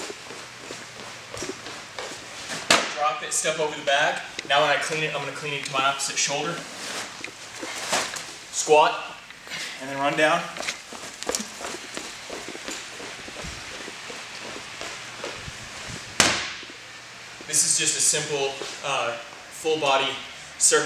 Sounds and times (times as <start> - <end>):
Speech: 3.0 - 6.6, 8.6 - 9.2, 9.8 - 10.6, 17.5 - 20.8
Run: 10.6 - 16.1.